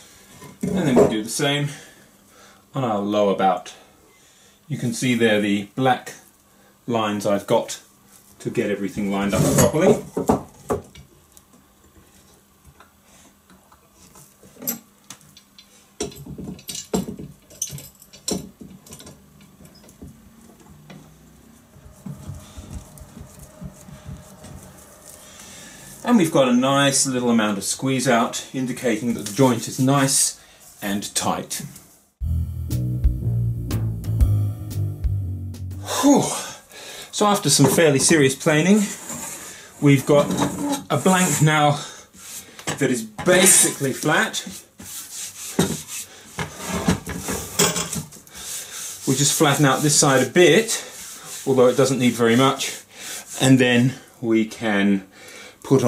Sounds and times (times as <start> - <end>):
Speech: 0.6 - 1.9, 2.7 - 3.8, 4.7 - 6.3, 6.9 - 10.1, 26.0 - 31.8, 35.9 - 39.0, 39.8 - 41.9, 42.7 - 44.6, 49.0 - 52.8, 53.4 - 55.8.